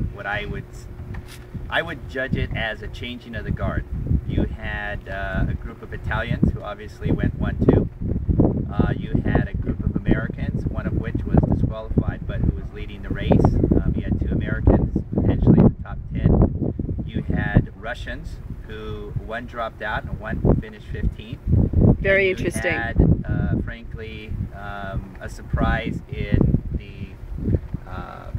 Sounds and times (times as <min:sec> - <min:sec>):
Speech: 0:00.0 - 0:00.9, 0:01.7 - 0:07.8, 0:08.7 - 0:16.3, 0:17.1 - 0:21.4, 0:22.0 - 0:27.2, 0:27.9 - 0:28.3.